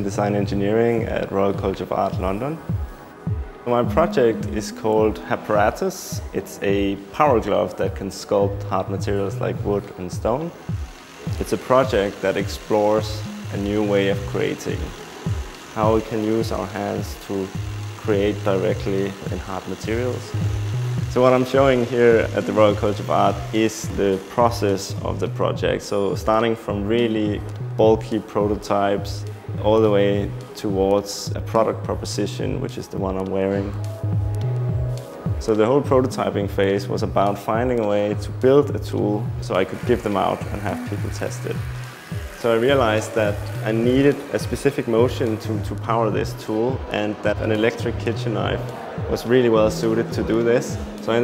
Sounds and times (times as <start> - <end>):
Speech: 0.0 - 2.6, 3.6 - 10.6, 11.4 - 15.0, 15.8 - 20.4, 21.1 - 33.8, 35.4 - 41.6, 42.4 - 51.2
Music: 0.0 - 51.2.